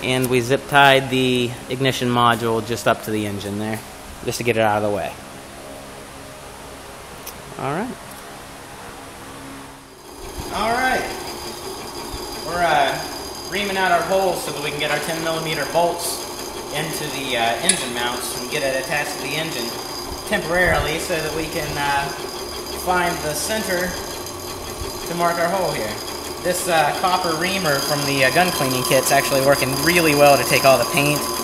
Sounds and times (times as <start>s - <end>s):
Speech: 0.0s - 5.2s, 7.6s - 8.0s, 16.8s - 19.7s, 25.1s - 31.2s.